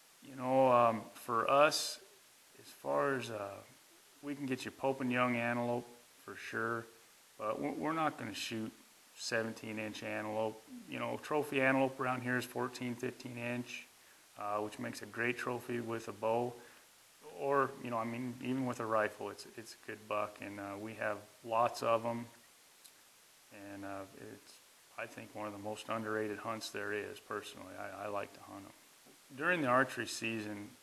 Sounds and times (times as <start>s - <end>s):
Speech: 0.2s - 2.0s, 2.6s - 16.6s, 17.3s - 22.4s, 23.6s - 30.8s.